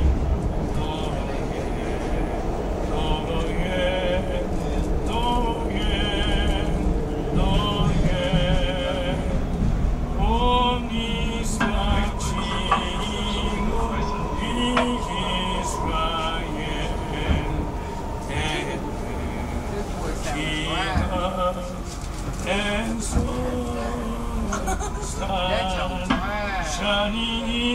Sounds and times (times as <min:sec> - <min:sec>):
Male singing: 0:00.0 - 0:27.7
Speech: 0:22.9 - 0:27.7.